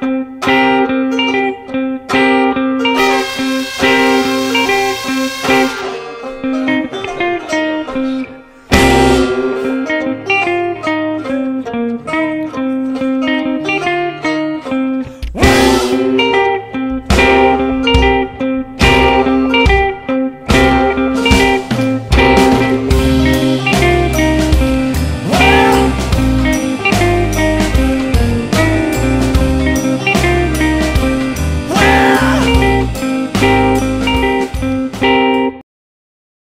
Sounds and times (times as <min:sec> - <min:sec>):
Music: 0:00.0 - 0:35.6.